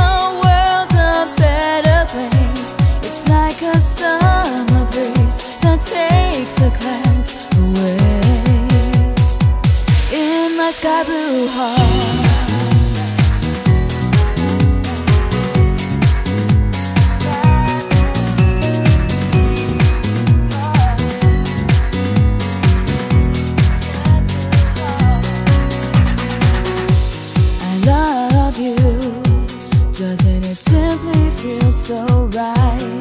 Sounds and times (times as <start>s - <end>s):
Music: 0.0s - 33.0s.